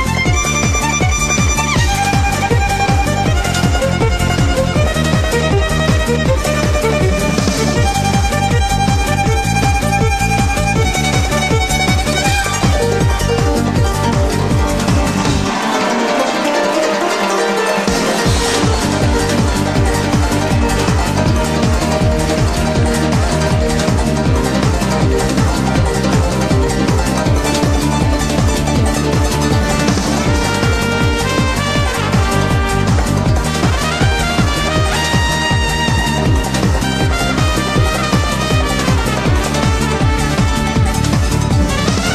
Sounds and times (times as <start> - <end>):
Violin, fiddle: 0.0 - 42.1.